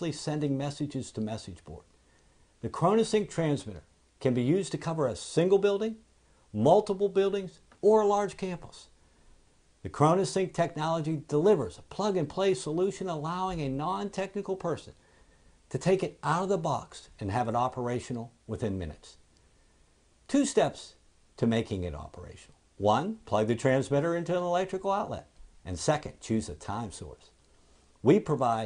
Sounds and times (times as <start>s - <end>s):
Speech: 0.0s - 1.9s, 2.6s - 9.0s, 9.8s - 15.0s, 15.7s - 19.2s, 20.3s - 27.4s, 28.0s - 28.6s.